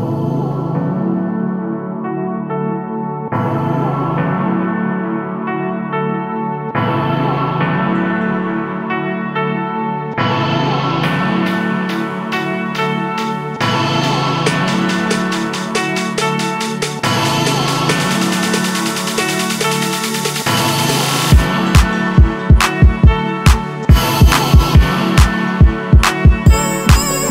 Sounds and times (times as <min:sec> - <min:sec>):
Ambient music: 0:00.0 - 0:27.3.